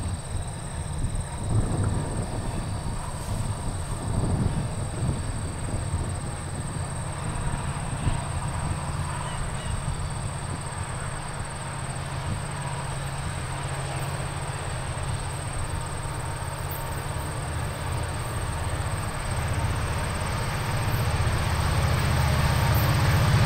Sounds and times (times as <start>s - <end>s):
Outside, rural or natural: 0.0s - 23.4s
Railroad car, train wagon: 0.0s - 23.4s
Train: 0.0s - 23.4s.